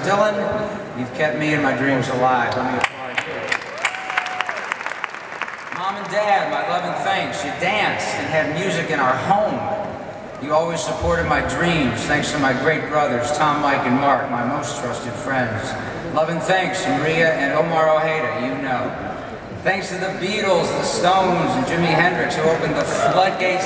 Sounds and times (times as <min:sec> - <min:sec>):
Male speech, man speaking: 0:00.0 - 0:03.5, 0:05.8 - 0:09.8, 0:10.4 - 0:19.0, 0:19.6 - 0:23.6
Narration, monologue: 0:00.0 - 0:03.7, 0:05.4 - 0:23.6.